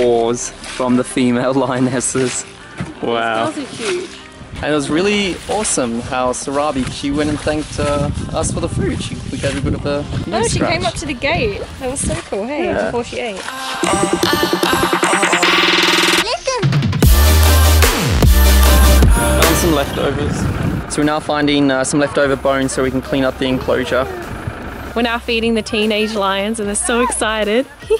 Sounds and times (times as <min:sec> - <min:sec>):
Outside, rural or natural: 0:00.0 - 0:15.3, 0:16.1 - 0:27.9
Music: 0:00.0 - 0:21.5, 0:22.1 - 0:27.9.